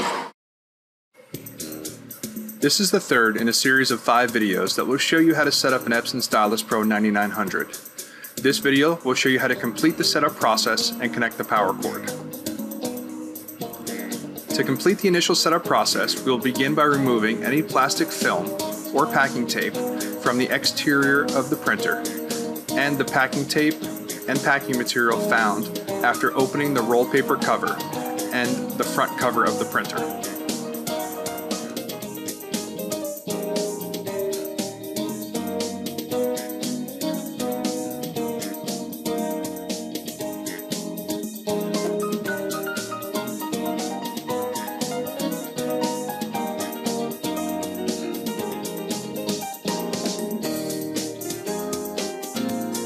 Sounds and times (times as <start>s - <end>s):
Music: 1.2s - 52.8s
Speech: 2.6s - 7.8s, 8.4s - 12.2s, 14.5s - 22.1s, 22.7s - 30.2s.